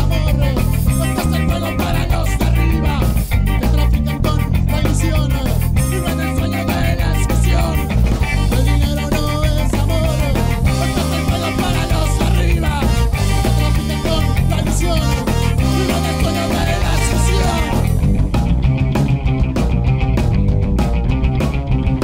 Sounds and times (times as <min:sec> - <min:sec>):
Punk rock: 0:00.0 - 0:22.0.